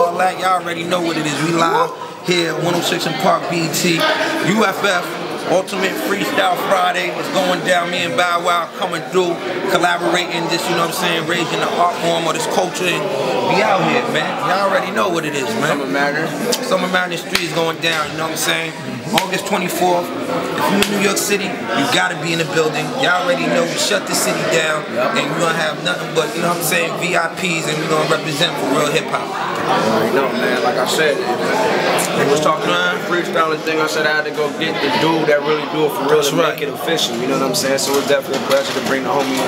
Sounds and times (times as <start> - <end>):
Speech: 0.0 - 39.4.